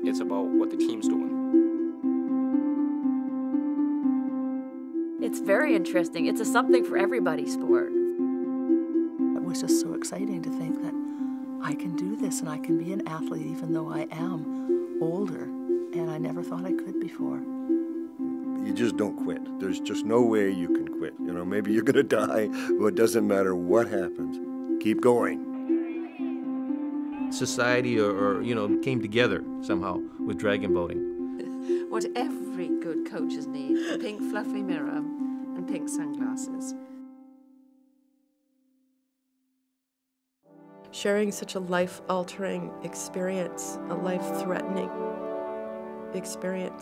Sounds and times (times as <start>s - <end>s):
Music: 0.0s - 38.0s, 40.5s - 46.8s.